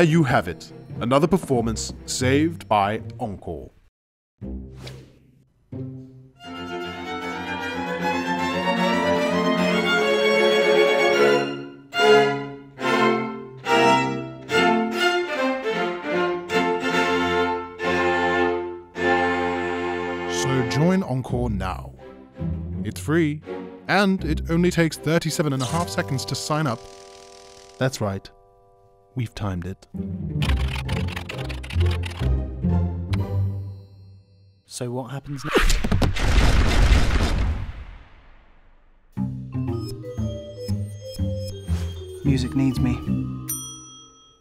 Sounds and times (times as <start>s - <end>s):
Music: 0.0s - 3.7s, 4.4s - 34.7s, 39.1s - 44.4s
Speech: 0.0s - 3.8s, 20.3s - 22.0s, 22.8s - 26.8s, 27.8s - 28.3s, 29.2s - 29.9s, 34.7s - 35.4s, 42.2s - 43.1s.